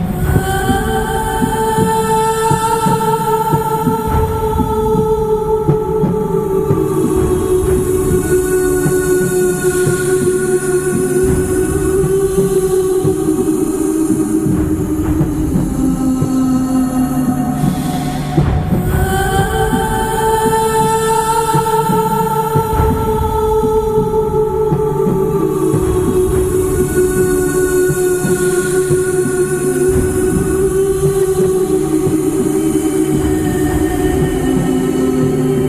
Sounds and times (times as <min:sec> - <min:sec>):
Music: 0:00.0 - 0:35.6.